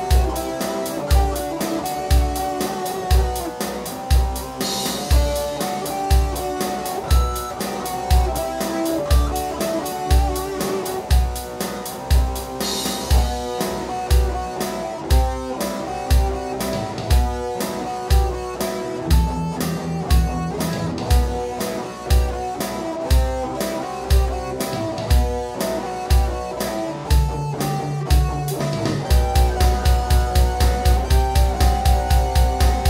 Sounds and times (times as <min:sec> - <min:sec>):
Music: 0:00.0 - 0:32.8.